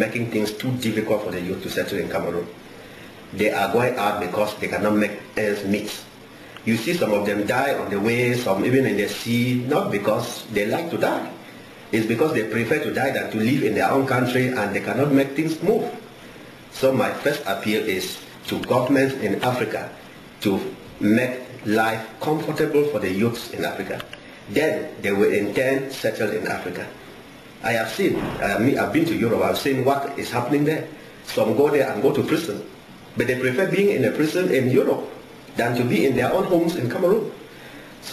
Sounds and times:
Male speech, man speaking: 0:00.0 - 0:02.5, 0:03.4 - 0:06.1, 0:06.7 - 0:16.0, 0:16.7 - 0:27.0, 0:27.6 - 0:37.4.

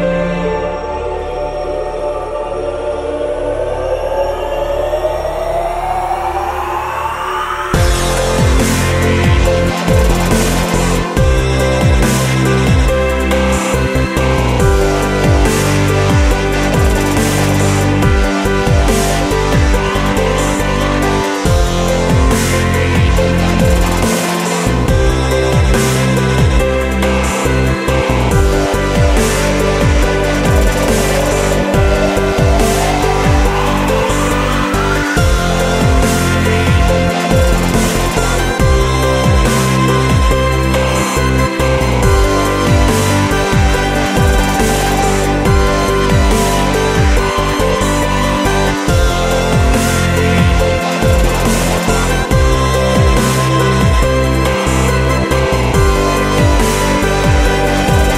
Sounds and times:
Music: 0:00.0 - 0:58.1.

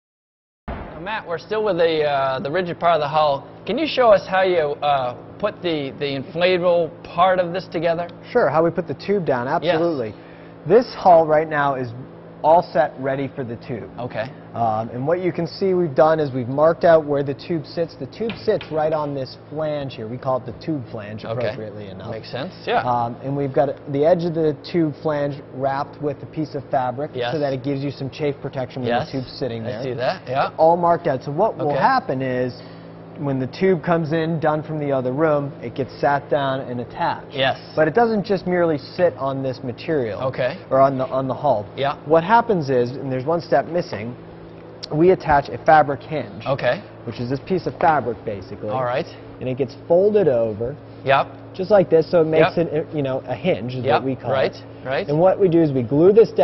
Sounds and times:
Speech: 0:01.0 - 0:32.6, 0:33.2 - 0:44.2, 0:44.8 - 0:56.4.

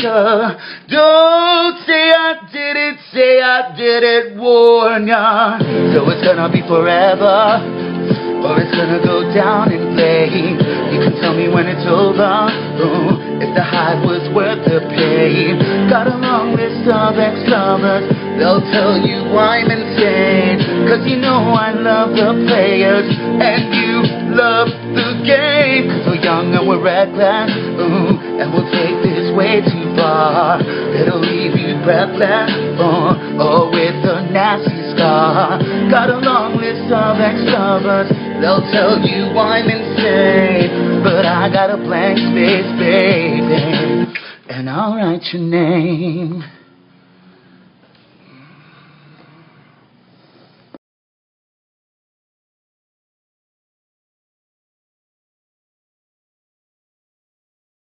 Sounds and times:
Singing: 0:00.0 - 0:46.6
Music: 0:03.7 - 0:44.4.

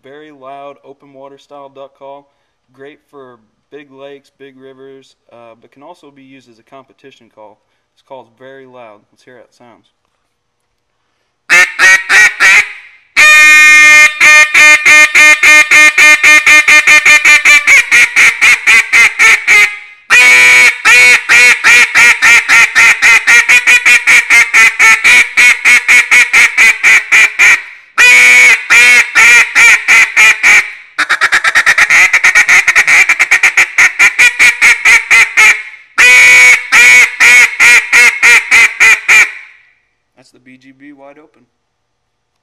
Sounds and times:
Quack: 0:28.8 - 0:36.2.

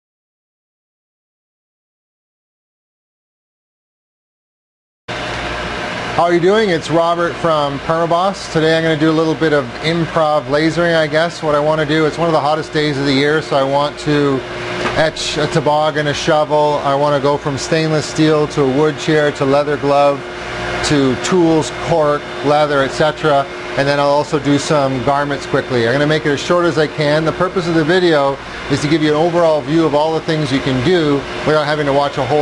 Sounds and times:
Speech: 0:06.2 - 0:14.4, 0:15.0 - 0:20.2, 0:20.8 - 0:32.4.

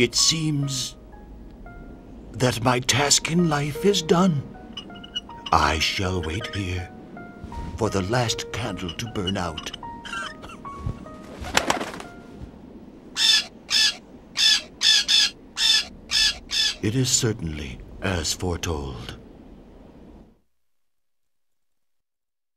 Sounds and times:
Speech: 0:00.0 - 0:01.0, 0:02.4 - 0:04.5, 0:05.6 - 0:06.9, 0:07.8 - 0:09.7, 0:16.8 - 0:19.2
Music: 0:00.0 - 0:12.5.

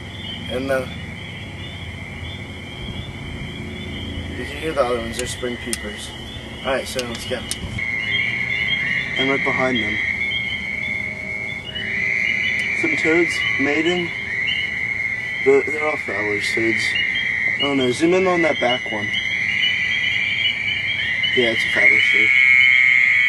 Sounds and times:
Speech: 0:00.5 - 0:00.9, 0:04.4 - 0:06.1, 0:06.7 - 0:07.5, 0:09.2 - 0:10.0, 0:12.8 - 0:14.1, 0:15.5 - 0:17.0, 0:17.6 - 0:19.1, 0:21.4 - 0:22.3.

